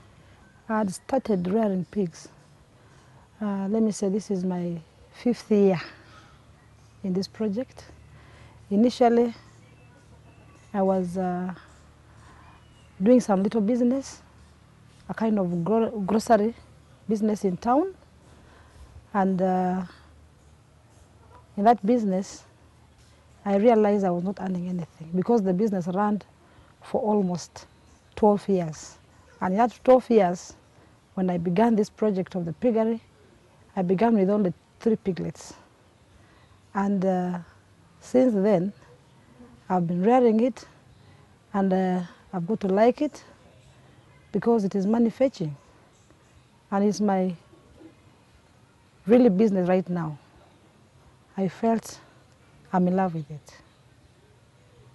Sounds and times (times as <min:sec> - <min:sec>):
Speech: 0:00.7 - 0:02.3, 0:03.4 - 0:06.0, 0:07.0 - 0:07.9, 0:08.7 - 0:10.0, 0:10.7 - 0:11.7, 0:13.0 - 0:14.2, 0:15.1 - 0:18.0, 0:19.1 - 0:20.0, 0:21.6 - 0:22.5, 0:23.4 - 0:30.6, 0:31.2 - 0:33.0, 0:33.8 - 0:35.6, 0:36.7 - 0:38.8, 0:39.7 - 0:40.8, 0:41.5 - 0:43.3, 0:44.2 - 0:45.6, 0:46.7 - 0:47.4, 0:49.0 - 0:50.3, 0:51.4 - 0:52.1, 0:52.7 - 0:53.6.